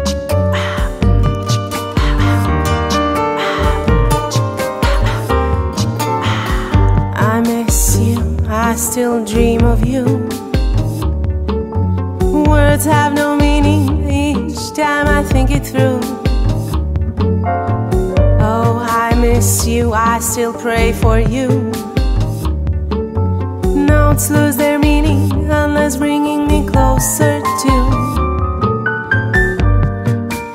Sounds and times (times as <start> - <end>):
Tender music: 0.0 - 30.5.